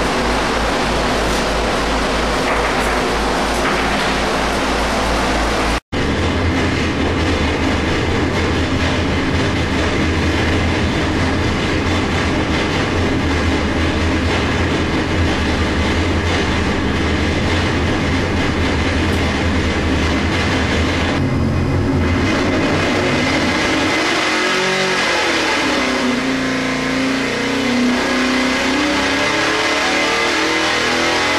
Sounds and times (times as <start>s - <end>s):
Heavy engine (low frequency): 0.0s - 31.3s.